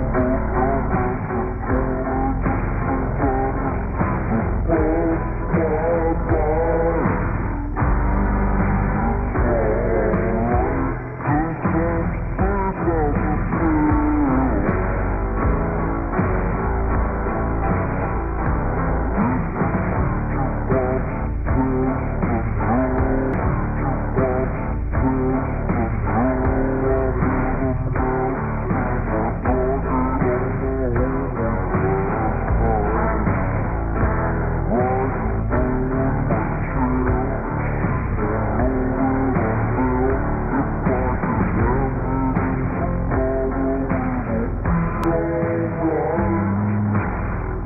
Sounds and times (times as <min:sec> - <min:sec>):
Music: 0:00.0 - 0:47.6.